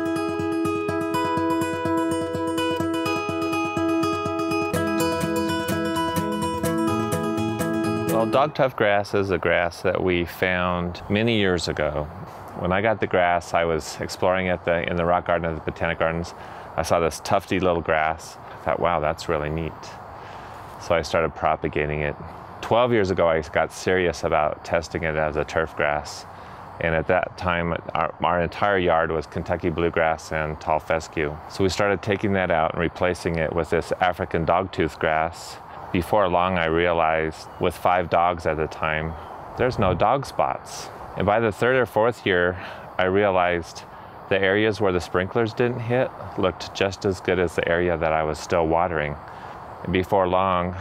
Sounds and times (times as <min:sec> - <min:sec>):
Speech: 0:08.1 - 0:20.0, 0:20.8 - 0:49.2, 0:49.8 - 0:50.8.